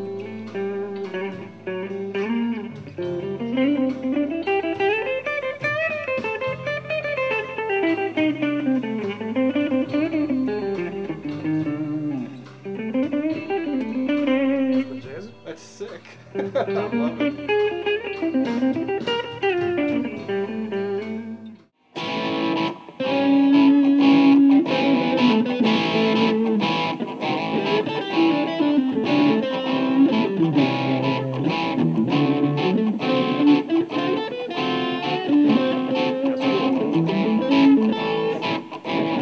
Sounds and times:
Guitar: 0.0s - 39.2s.

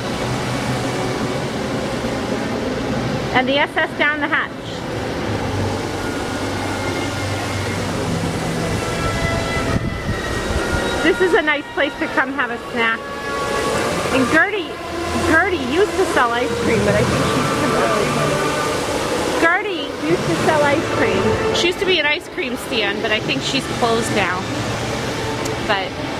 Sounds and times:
Speech: 3.4s - 4.8s, 11.0s - 13.0s, 13.8s - 18.4s, 19.4s - 24.4s, 25.6s - 25.9s.

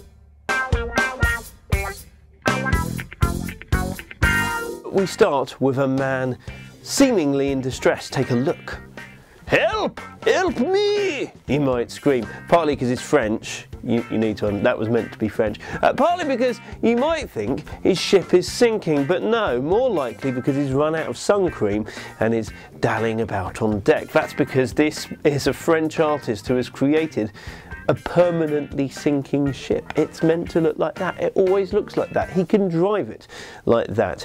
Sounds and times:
Music: 0.0s - 34.2s
Speech: 4.9s - 8.8s, 9.5s - 34.2s.

